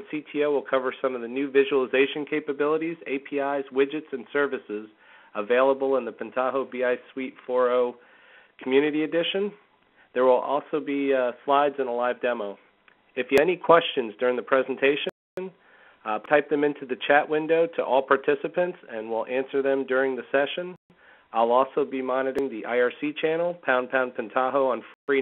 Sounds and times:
Speech: 0.0 - 8.0, 8.6 - 12.6, 13.2 - 25.2.

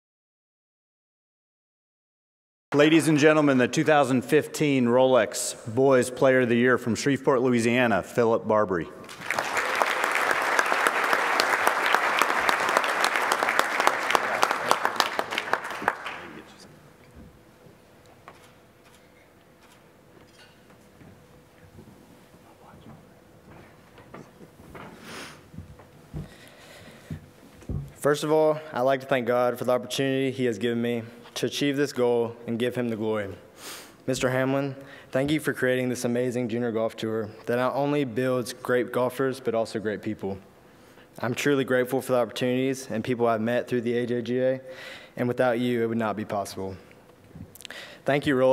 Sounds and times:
Male speech, man speaking: 2.8 - 9.0, 16.2 - 16.7, 28.0 - 33.4, 34.1 - 40.4, 41.2 - 46.9, 48.1 - 48.5
Narration, monologue: 2.8 - 9.2, 25.0 - 48.5.

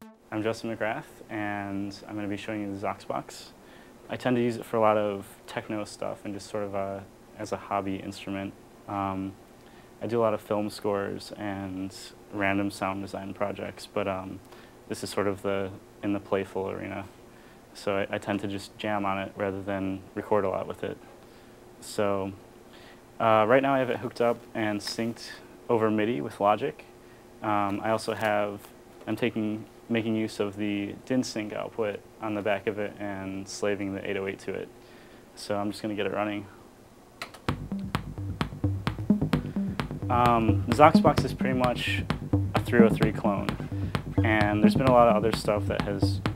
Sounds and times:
Speech: 0.3 - 9.4, 10.0 - 17.1, 17.8 - 21.0, 21.8 - 22.4, 23.2 - 34.8, 35.4 - 36.6, 40.1 - 43.6, 44.2 - 46.2.

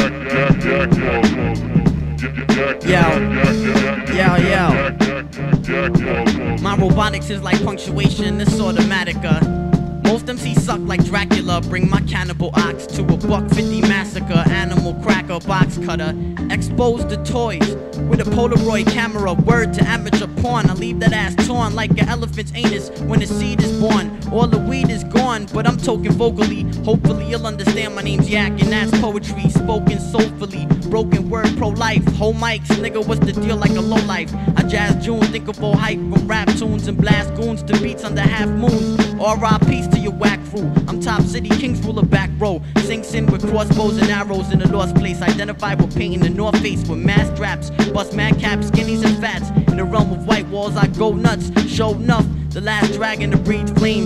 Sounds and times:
Music: 0.0 - 54.0.

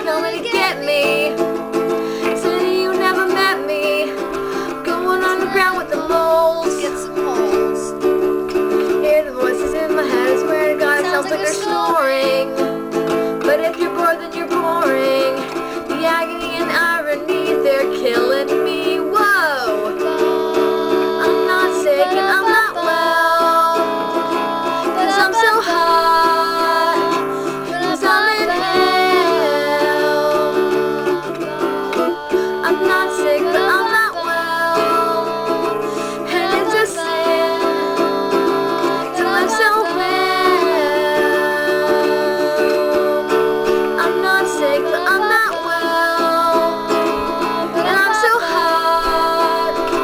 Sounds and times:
Guitar: 0.0 - 50.0.

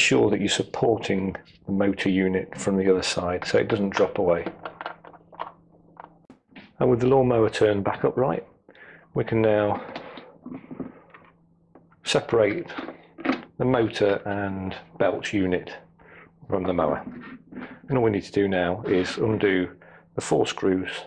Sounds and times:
Speech: 0.0 - 4.6, 6.7 - 8.6, 9.2 - 10.2, 12.0 - 13.0, 13.6 - 15.9, 16.5 - 17.2, 17.8 - 21.0.

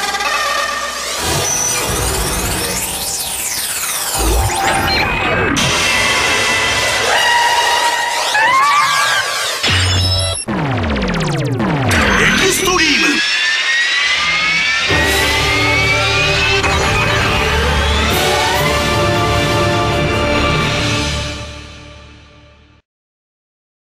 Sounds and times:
Music: 0.0 - 8.7, 9.6 - 22.8.

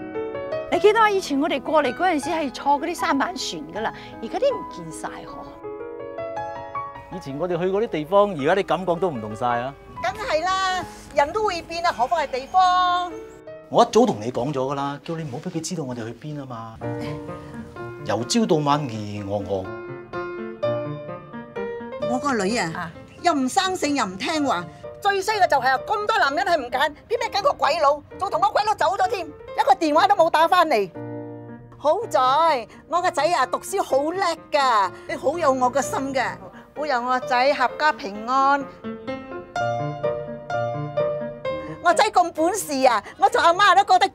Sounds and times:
Music: 0.0 - 44.1.

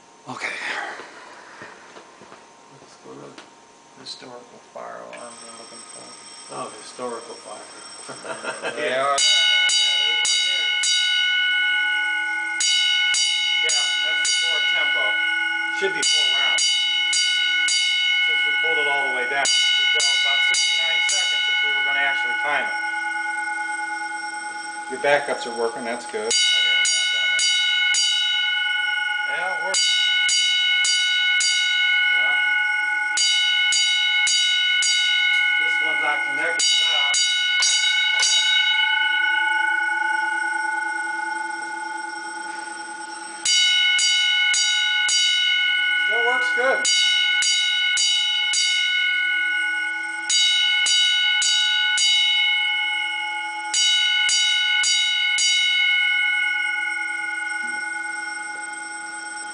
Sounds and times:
Speech: 0.3 - 0.9, 2.8 - 3.4, 4.0 - 7.7, 8.7 - 10.7, 13.7 - 15.2, 15.8 - 16.6, 18.3 - 22.7, 24.9 - 27.4, 29.3 - 29.8, 35.6 - 37.2, 46.1 - 46.9.

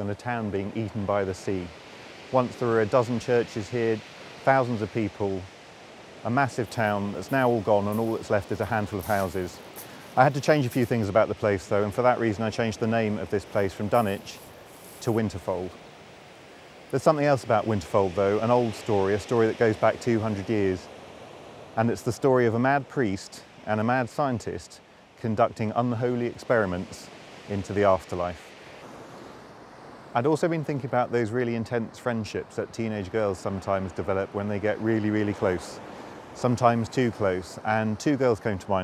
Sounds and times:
Speech: 0.0 - 1.7, 2.3 - 5.5, 6.3 - 9.6, 10.2 - 14.4, 15.0 - 15.8, 16.9 - 20.9, 21.8 - 28.4, 30.2 - 35.8, 36.4 - 38.8.

